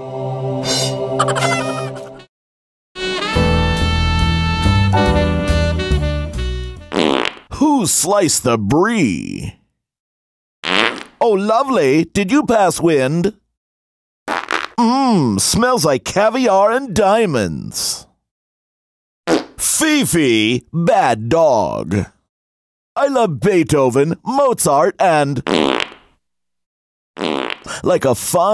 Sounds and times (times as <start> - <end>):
Fart: 6.9 - 7.5, 10.6 - 11.2, 14.3 - 14.8, 19.3 - 19.6, 25.5 - 26.1, 27.2 - 27.8
Speech: 7.5 - 9.6, 11.2 - 13.4, 14.8 - 18.2, 19.6 - 22.2, 23.0 - 25.5, 27.7 - 28.5.